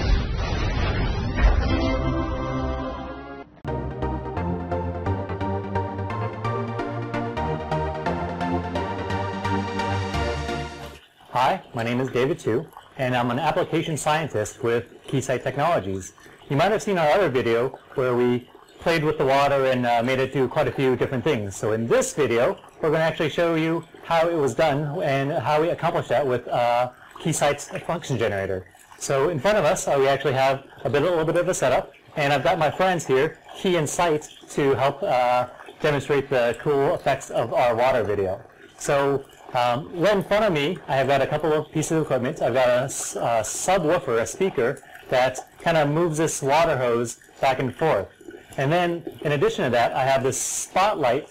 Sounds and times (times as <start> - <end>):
Gurgling: 10.0 - 51.3
Speech: 11.3 - 51.3.